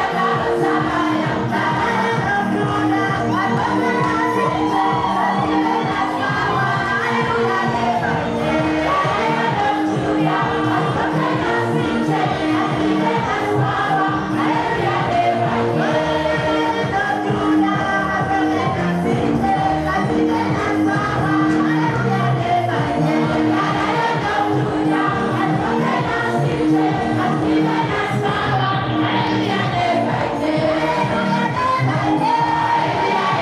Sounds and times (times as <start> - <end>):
Music: 0.0 - 33.4.